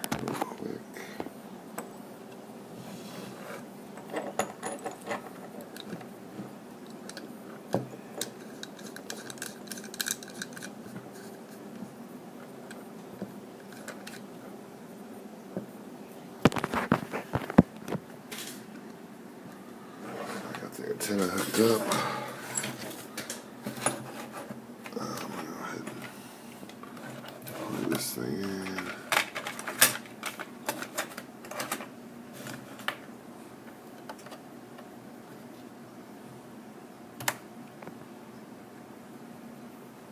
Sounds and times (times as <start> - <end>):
Inside, small room: 0.0 - 40.1.